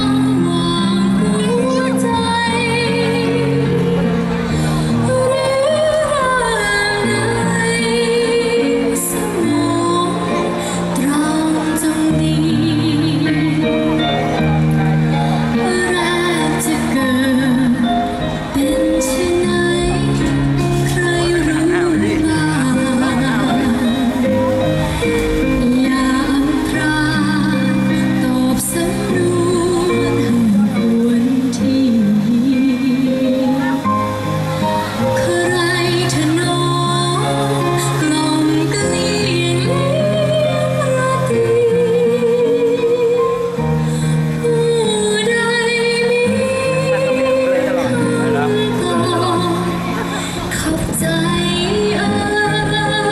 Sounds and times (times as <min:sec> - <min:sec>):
Female singing: 0:00.0 - 0:14.2, 0:15.5 - 0:34.1, 0:35.0 - 0:53.1
Music: 0:00.0 - 0:53.1.